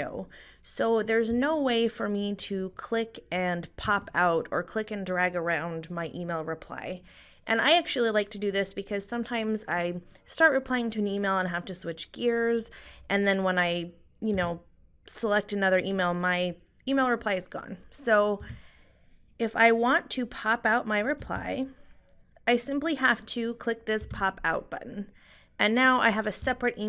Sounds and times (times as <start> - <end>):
Speech: 0.0 - 18.6, 19.4 - 21.8, 22.5 - 26.8.